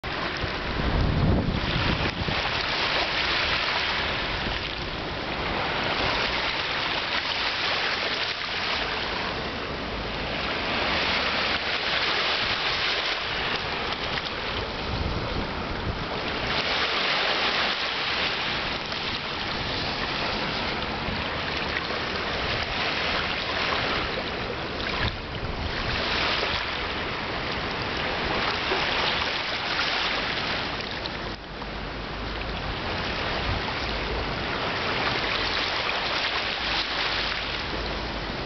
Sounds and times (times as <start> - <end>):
Stream: 0.0 - 38.4.